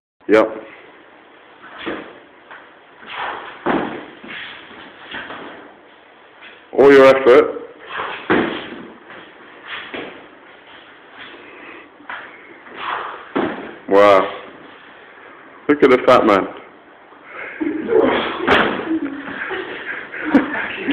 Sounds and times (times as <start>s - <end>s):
Speech: 15.7s - 16.6s.